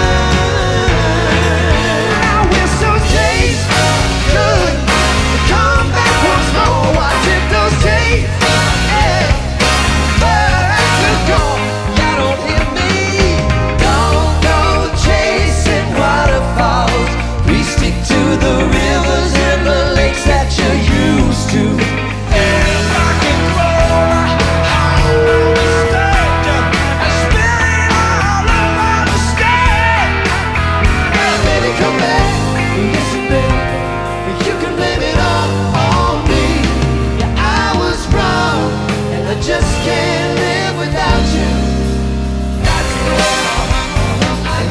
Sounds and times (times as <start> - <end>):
Music: 0.0 - 44.7.